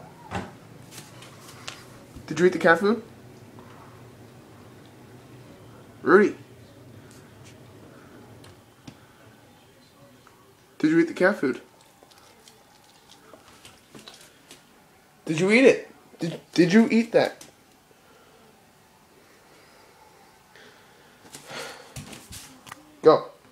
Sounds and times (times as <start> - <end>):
Dog: 11.7 - 14.3.